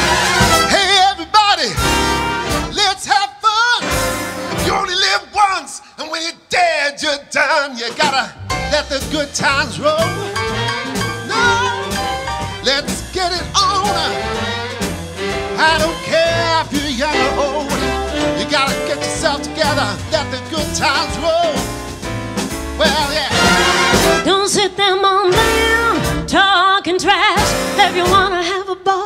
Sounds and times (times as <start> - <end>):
Orchestra: 0.0 - 5.2, 8.0 - 26.3, 27.4 - 28.5.